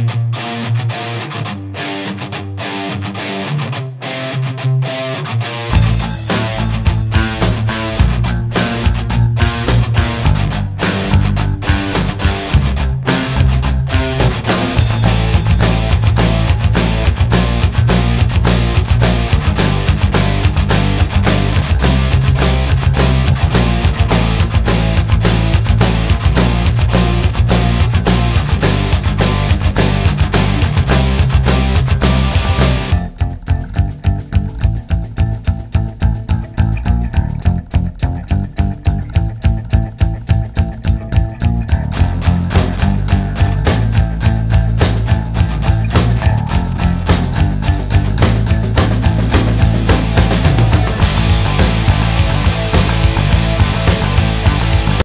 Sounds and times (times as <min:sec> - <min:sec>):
Music: 0:00.0 - 0:55.0.